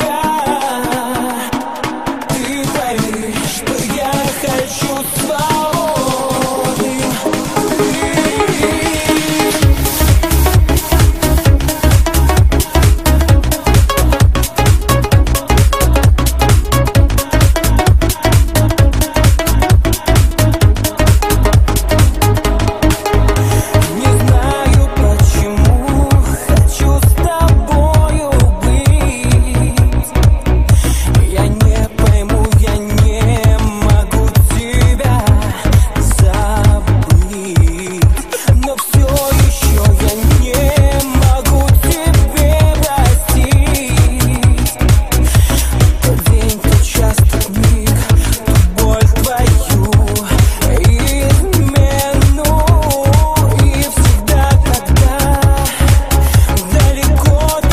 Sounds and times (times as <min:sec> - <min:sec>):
Dance music: 0:00.0 - 0:57.7.